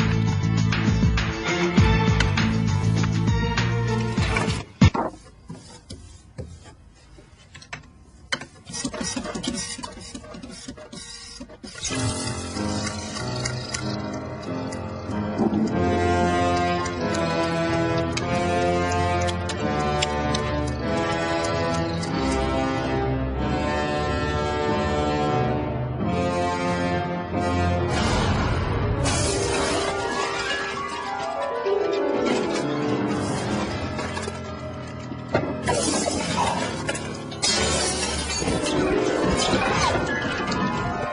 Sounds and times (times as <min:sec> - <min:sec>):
Music: 0:00.0 - 0:06.1, 0:11.6 - 0:41.1.